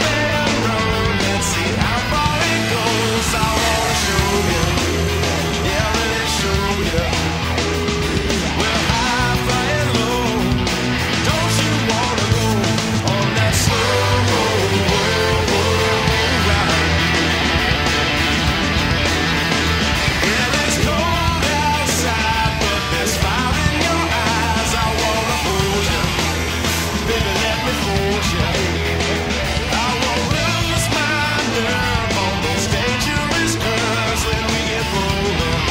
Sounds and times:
Music: 0.0 - 35.7.

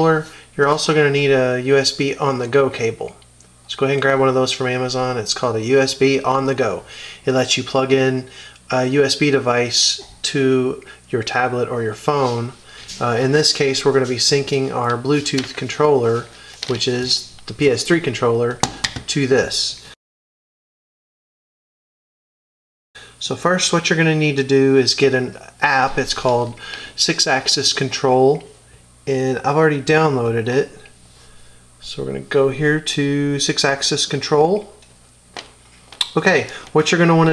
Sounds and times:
Speech: 0.0 - 20.0, 23.2 - 30.9, 31.8 - 34.8, 36.0 - 37.3.

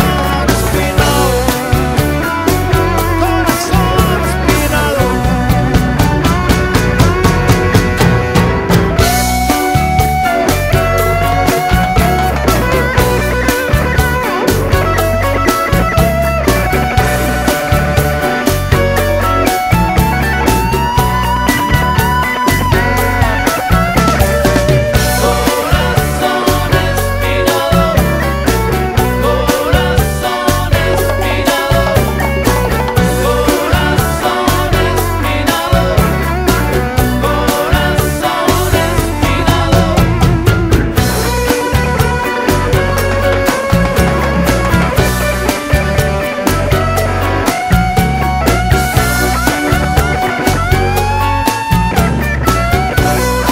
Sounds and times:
Psychedelic rock: 0.0 - 53.5.

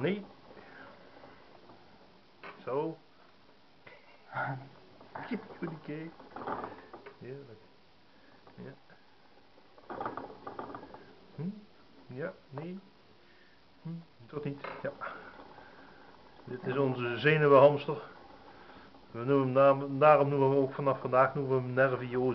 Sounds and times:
Speech: 0.0 - 0.3, 2.6 - 3.0, 4.3 - 6.2, 7.2 - 7.6, 8.6 - 8.8, 11.4 - 12.9, 13.8 - 15.0, 16.5 - 18.2, 19.1 - 22.3.

